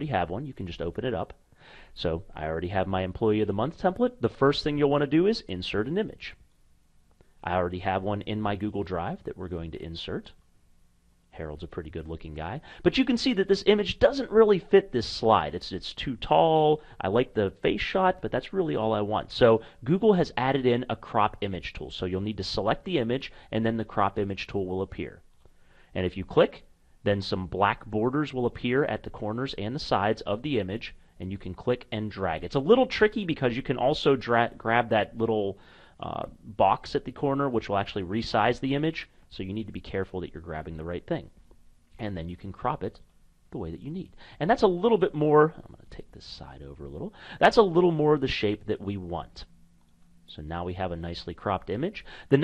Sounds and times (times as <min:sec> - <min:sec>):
Speech: 0:00.0 - 0:06.4, 0:07.4 - 0:10.4, 0:11.3 - 0:25.3, 0:25.9 - 0:41.4, 0:42.0 - 0:49.5, 0:50.3 - 0:52.4.